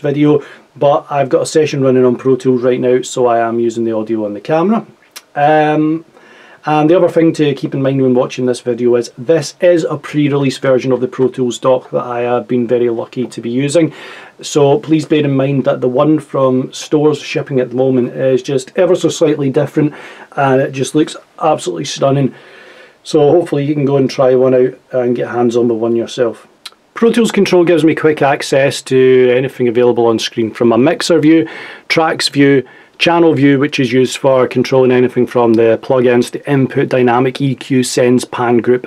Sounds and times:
Speech: 0:00.0 - 0:22.4, 0:23.0 - 0:38.8.

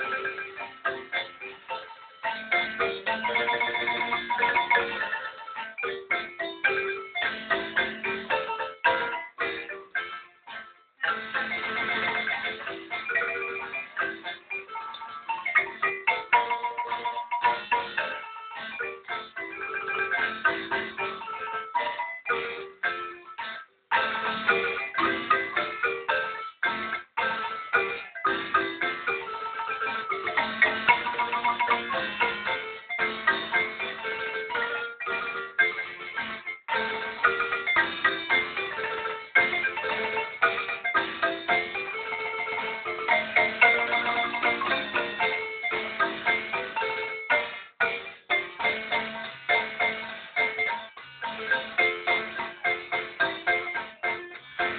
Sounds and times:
Marimba, xylophone: 0:00.0 - 0:54.7.

